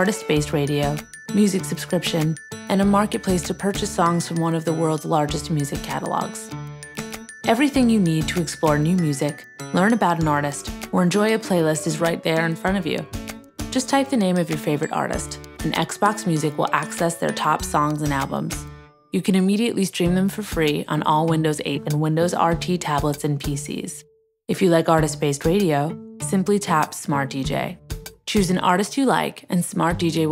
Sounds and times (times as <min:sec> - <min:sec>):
Speech: 0:00.0 - 0:06.5, 0:07.5 - 0:13.0, 0:13.7 - 0:18.6, 0:19.2 - 0:30.3
Music: 0:00.0 - 0:30.3.